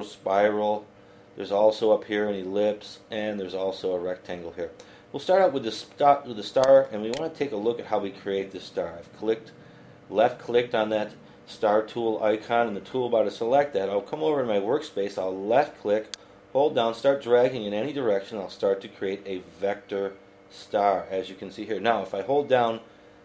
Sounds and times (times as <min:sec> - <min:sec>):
Speech: 0:00.0 - 0:09.5, 0:10.1 - 0:22.9.